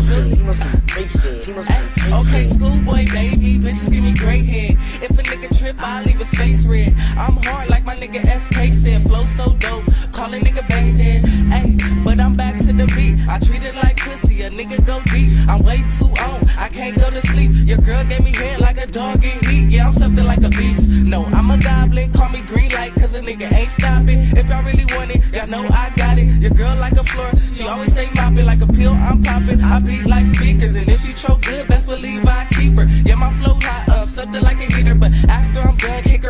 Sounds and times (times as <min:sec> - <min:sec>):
Exciting music: 0:00.0 - 0:36.3.